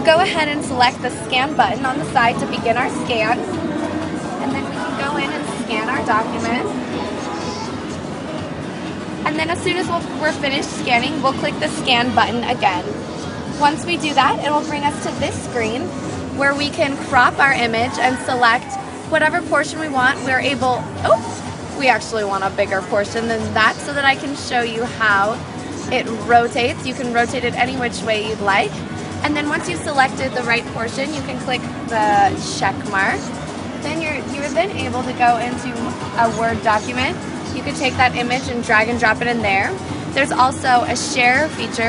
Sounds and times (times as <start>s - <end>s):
Speech: 0.0s - 3.6s, 4.4s - 7.8s, 9.2s - 13.0s, 13.6s - 41.8s.